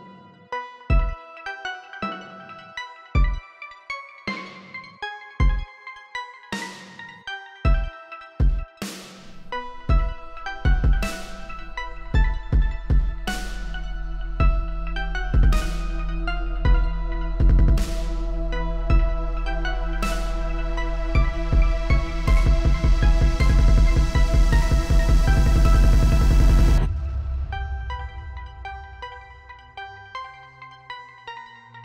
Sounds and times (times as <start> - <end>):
Dubstep: 8.8 - 29.9.